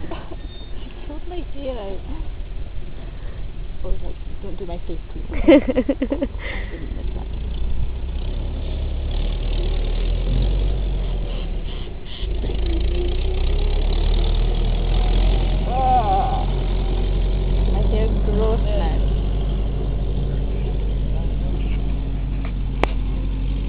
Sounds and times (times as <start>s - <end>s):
Outside, rural or natural: 0.0s - 23.6s.